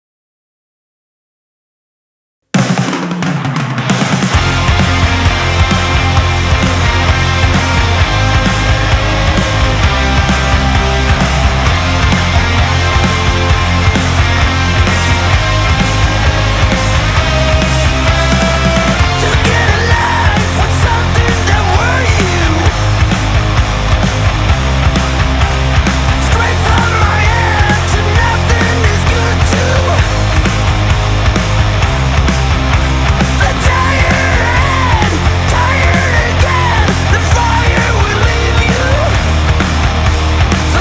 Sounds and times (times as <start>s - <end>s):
Music: 2.5s - 40.8s.